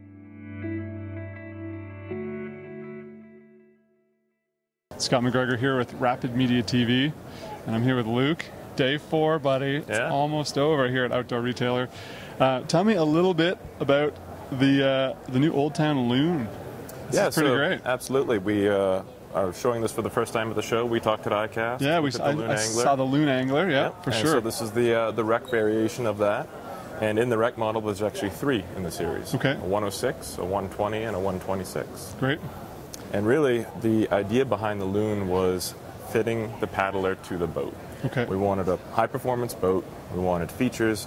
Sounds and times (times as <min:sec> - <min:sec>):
Speech: 0:05.0 - 0:41.0.